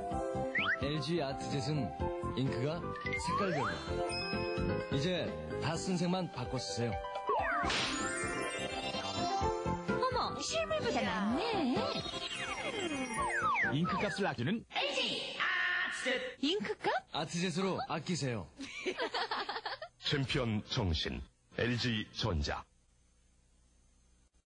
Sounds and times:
Speech: 0:20.0 - 0:22.7.

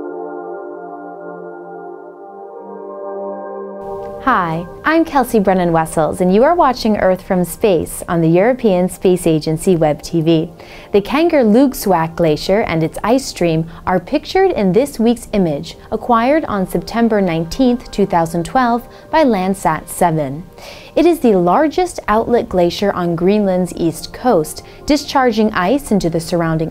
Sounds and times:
Music: 0:00.0 - 0:26.7
Speech: 0:04.2 - 0:26.7.

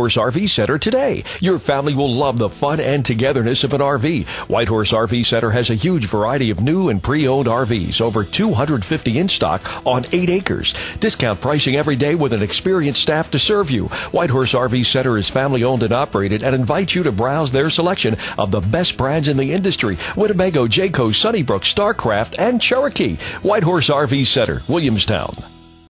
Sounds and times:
Speech: 0:00.0 - 0:25.5
Music: 0:00.0 - 0:25.8.

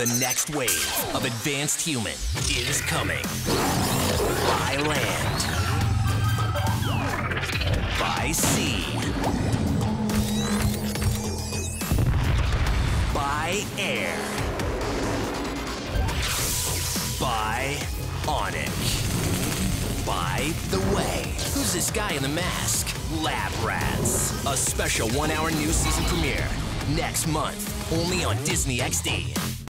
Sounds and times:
Speech: 0:00.0 - 0:03.3, 0:04.4 - 0:05.4, 0:07.9 - 0:09.1, 0:13.1 - 0:14.4, 0:17.2 - 0:19.0, 0:20.0 - 0:29.4
Music: 0:00.0 - 0:29.7.

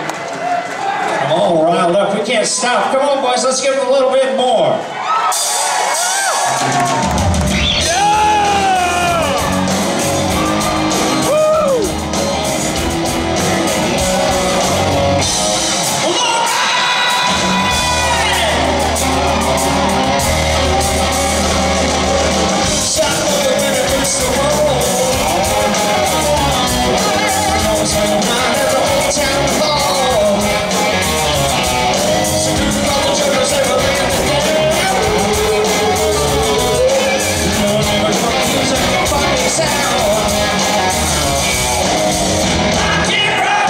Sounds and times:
Rock and roll: 0:00.0 - 0:43.6.

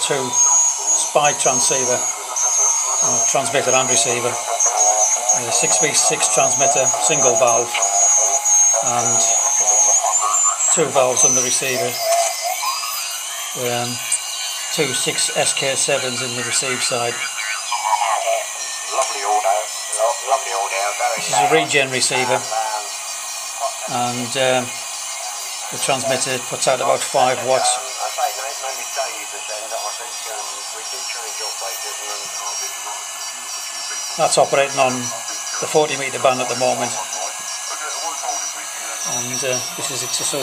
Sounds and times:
Speech: 0:00.0 - 0:12.3, 0:13.6 - 0:22.9, 0:23.6 - 0:24.8, 0:25.6 - 0:33.1, 0:33.8 - 0:40.4
Radio: 0:00.0 - 0:40.4.

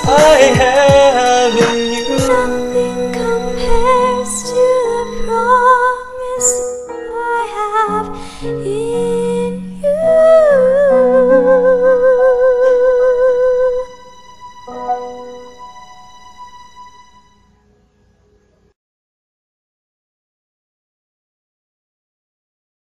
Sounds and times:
Christian music: 0:00.0 - 0:18.0.

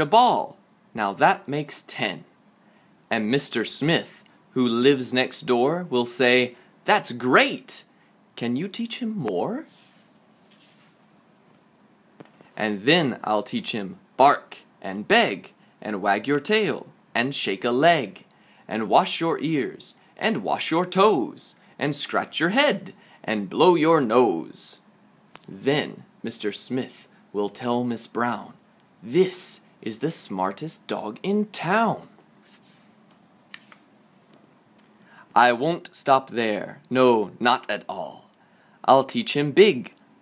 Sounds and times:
Speech: 0:00.0 - 0:02.3, 0:03.1 - 0:09.8, 0:12.6 - 0:24.8, 0:25.4 - 0:32.2, 0:35.3 - 0:40.0.

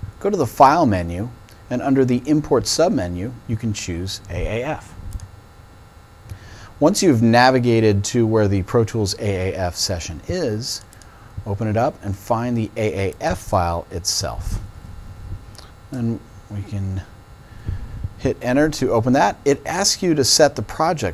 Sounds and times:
Speech: 0:00.2 - 0:05.0, 0:06.8 - 0:14.6, 0:15.9 - 0:17.1, 0:18.2 - 0:21.1.

